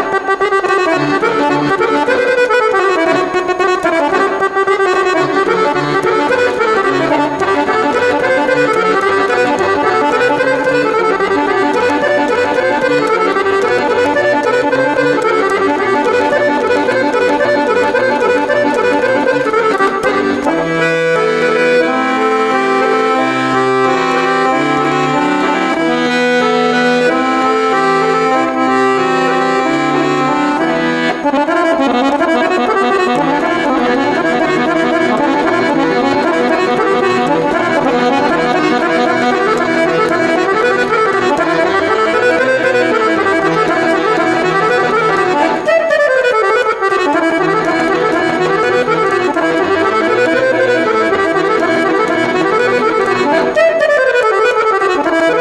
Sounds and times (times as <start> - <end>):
Accordion: 0.0 - 55.4.